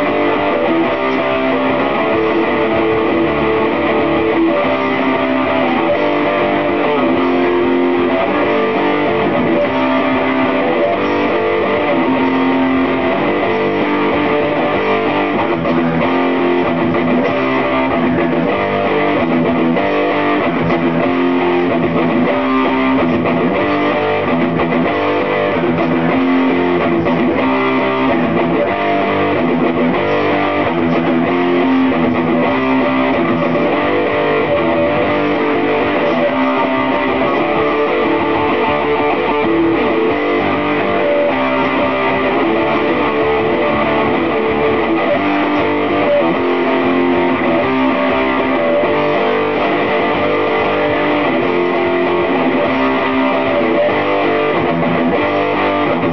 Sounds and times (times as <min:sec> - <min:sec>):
Acoustic guitar: 0:00.0 - 0:42.3.